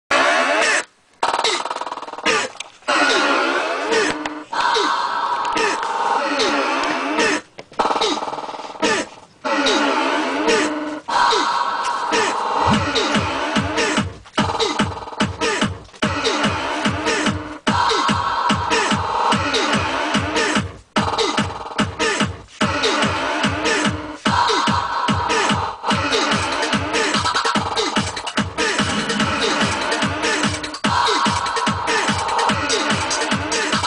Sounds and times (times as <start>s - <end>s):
Electronic music: 0.1s - 33.8s.